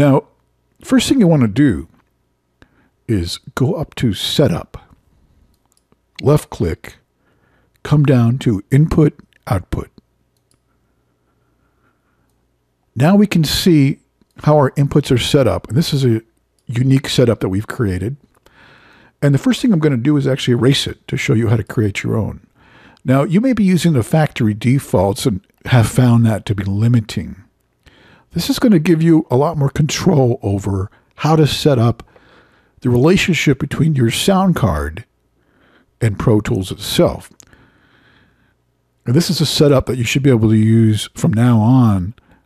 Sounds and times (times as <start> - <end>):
Speech: 0.0 - 2.0, 3.1 - 5.0, 6.2 - 7.0, 7.8 - 10.0, 13.0 - 18.2, 19.2 - 27.5, 28.3 - 32.1, 32.8 - 35.1, 36.0 - 37.4, 39.0 - 42.2.